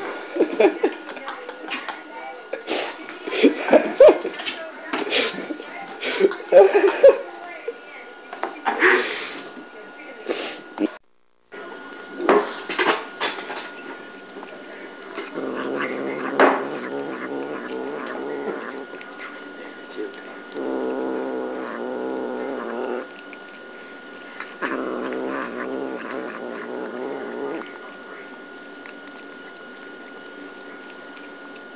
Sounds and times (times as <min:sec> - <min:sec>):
Speech: 0:00.5 - 0:03.2, 0:04.0 - 0:10.6.